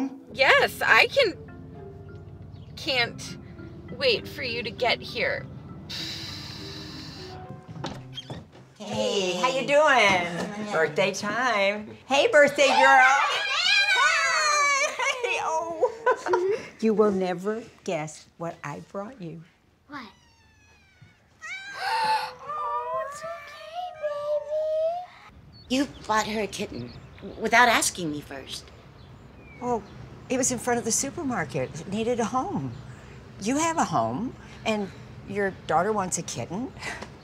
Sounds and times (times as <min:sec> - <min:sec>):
Caterwaul: 0:20.1 - 0:24.1.